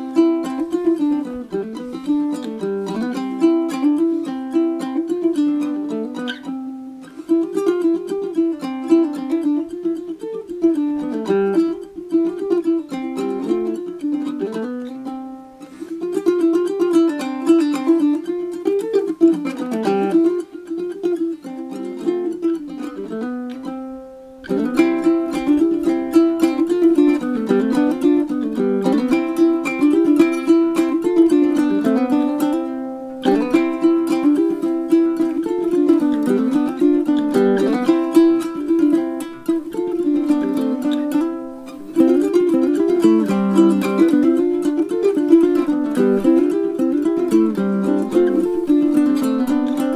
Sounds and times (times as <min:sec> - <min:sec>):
Ukulele: 0:00.0 - 0:49.9.